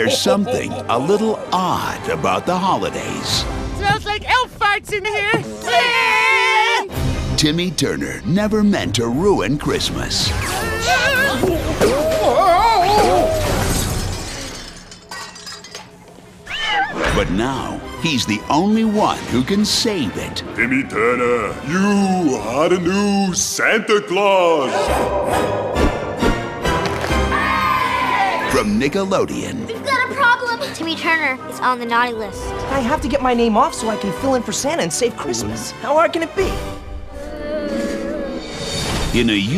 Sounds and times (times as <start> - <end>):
Music: 0.0 - 39.5.